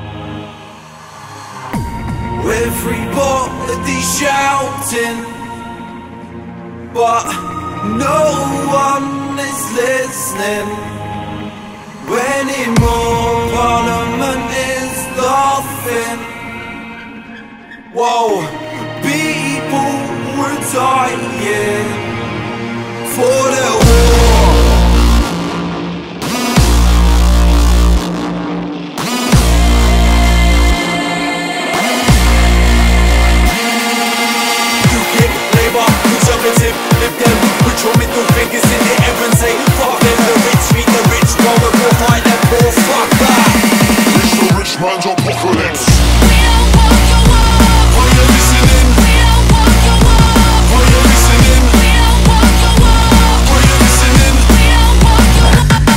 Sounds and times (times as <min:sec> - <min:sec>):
Music: 0:00.0 - 0:55.9.